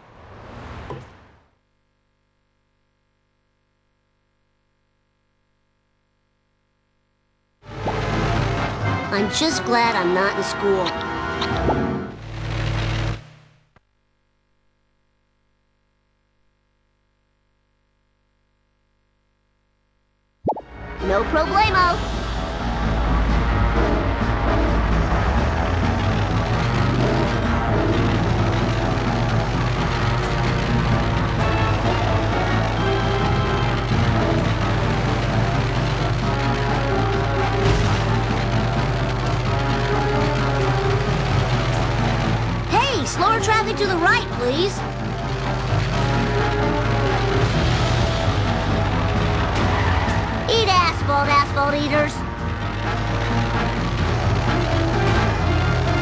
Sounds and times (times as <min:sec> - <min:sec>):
Music: 0:07.6 - 0:12.2, 0:20.6 - 0:56.0
Speech: 0:09.1 - 0:11.0, 0:42.7 - 0:44.8, 0:50.5 - 0:52.2.